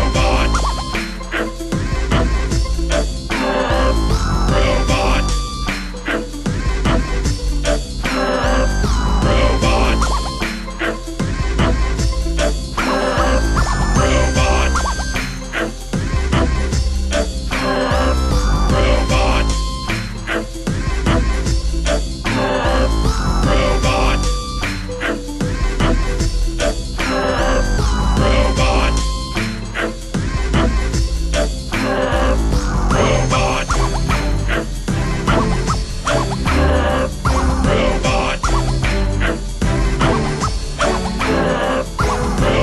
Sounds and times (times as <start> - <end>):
Music: 0.0 - 42.6.